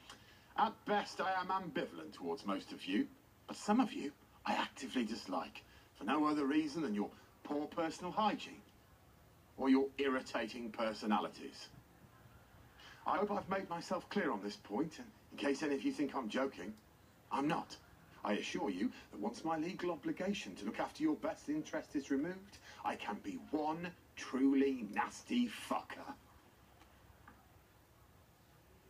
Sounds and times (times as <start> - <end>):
Narration, monologue: 0.0 - 27.5
Male speech, man speaking: 0.6 - 8.6, 9.6 - 11.8, 13.0 - 26.2.